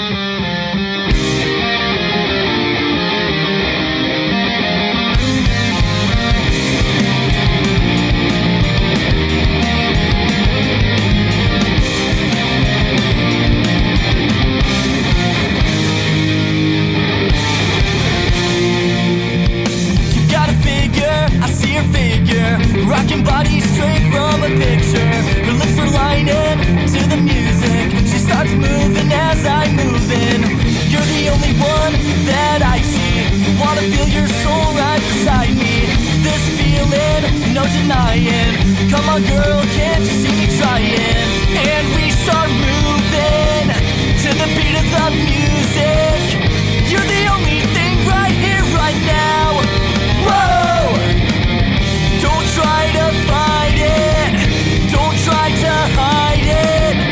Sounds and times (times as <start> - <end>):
Blues: 0.0 - 57.1.